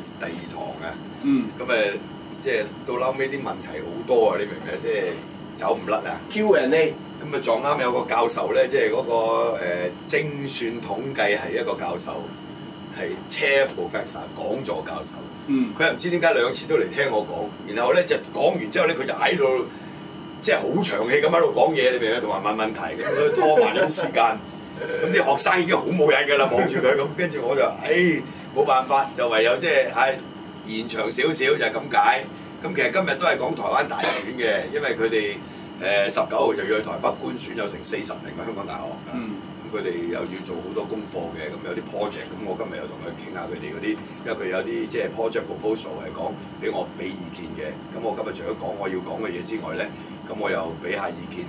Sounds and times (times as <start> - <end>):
Speech: 0.0 - 19.7, 20.4 - 51.4.